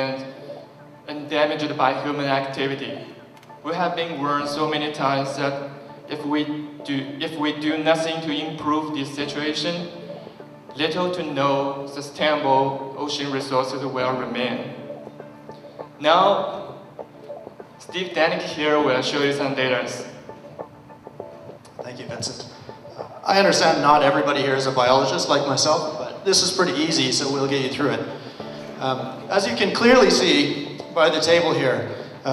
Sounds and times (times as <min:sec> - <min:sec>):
Music: 0:00.0 - 0:32.3
Speech: 0:01.1 - 0:09.9, 0:10.8 - 0:14.8, 0:16.0 - 0:16.6, 0:17.8 - 0:20.1, 0:21.8 - 0:28.2, 0:28.8 - 0:32.3.